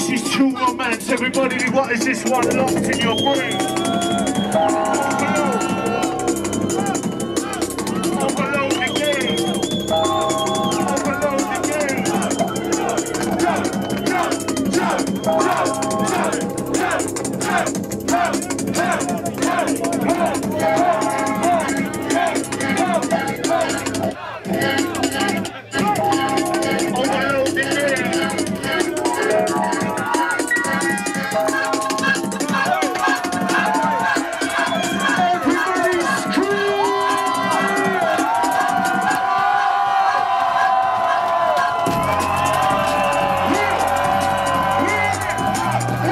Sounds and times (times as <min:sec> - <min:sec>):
Music: 0:00.0 - 0:46.1.